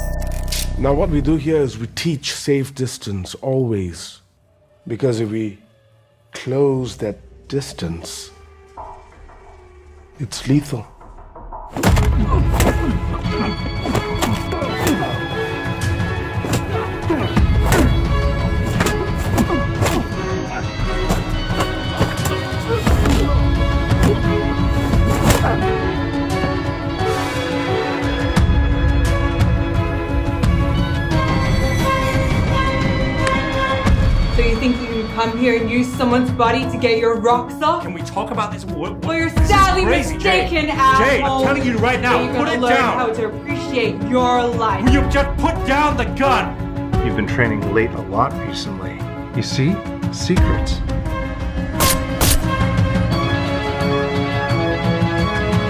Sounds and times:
Music: 0.0 - 55.7.

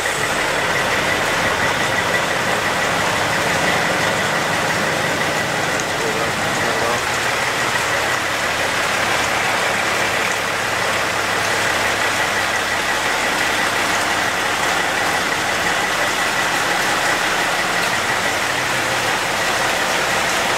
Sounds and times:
Vehicle: 0.0 - 20.5
Speech: 5.7 - 7.1.

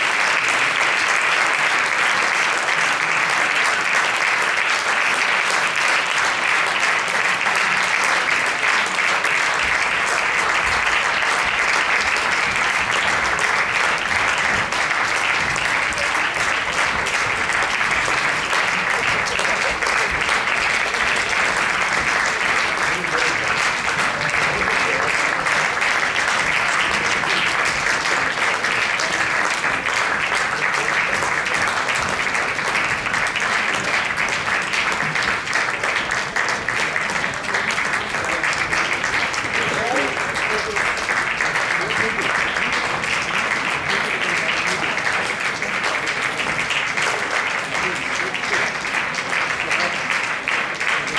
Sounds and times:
Applause: 0.0 - 51.1
Speech: 15.4 - 34.2, 35.0 - 51.1.

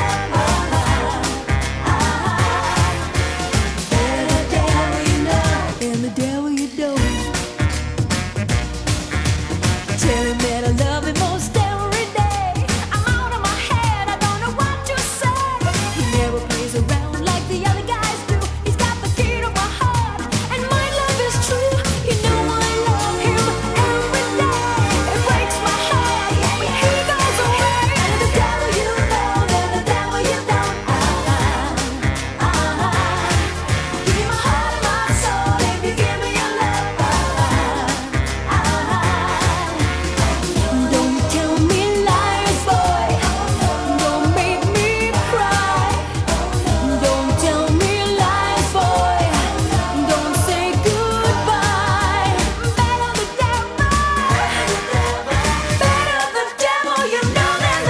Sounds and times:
Music: 0.0 - 57.9.

